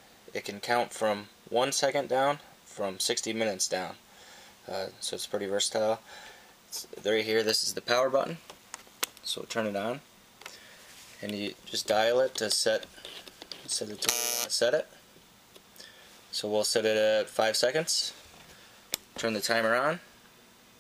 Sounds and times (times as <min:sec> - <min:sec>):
Speech: 0:00.3 - 0:04.0, 0:04.7 - 0:06.0, 0:06.7 - 0:08.4, 0:09.2 - 0:10.1, 0:11.2 - 0:12.9, 0:13.7 - 0:14.9, 0:16.3 - 0:18.2, 0:19.2 - 0:20.1.